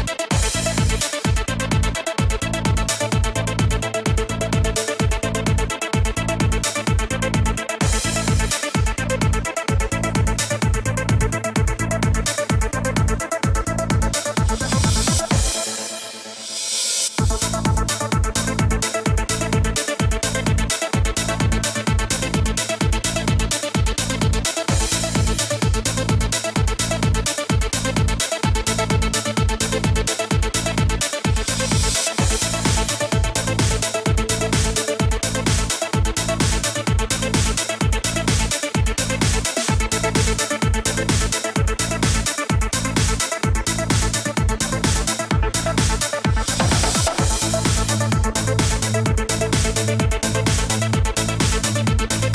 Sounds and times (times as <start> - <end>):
Music: 0.0 - 52.3.